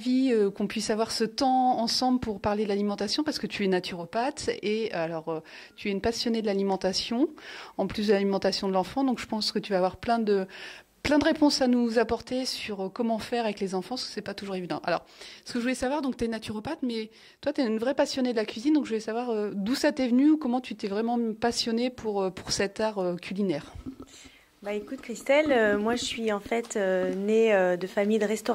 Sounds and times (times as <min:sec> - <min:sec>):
Speech: 0:00.0 - 0:10.4, 0:11.1 - 0:23.7, 0:24.6 - 0:28.5.